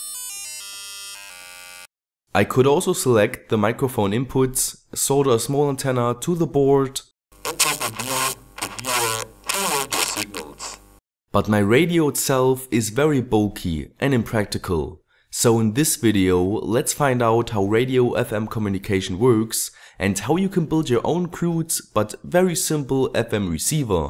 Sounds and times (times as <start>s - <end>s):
Speech: 2.4s - 10.8s, 11.4s - 24.0s.